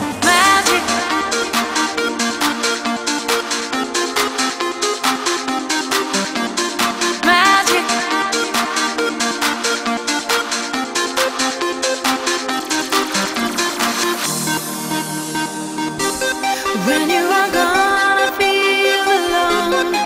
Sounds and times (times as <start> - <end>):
Trance music: 0.0 - 20.0.